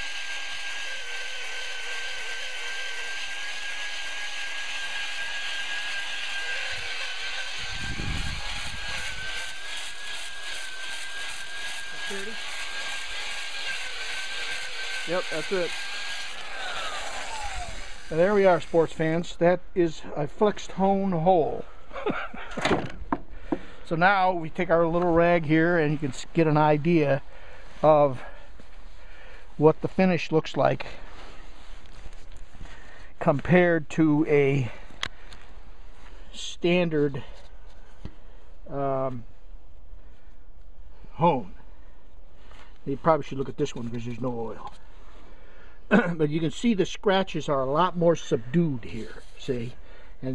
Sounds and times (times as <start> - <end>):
Outside, rural or natural: 0.0 - 50.3
Speech: 12.1 - 12.4, 15.1 - 15.8, 18.1 - 21.7, 23.9 - 27.2, 27.8 - 28.3, 29.6 - 31.0, 33.2 - 34.8, 36.4 - 37.3, 38.7 - 39.2, 41.2 - 41.6, 42.9 - 44.7, 45.9 - 50.3.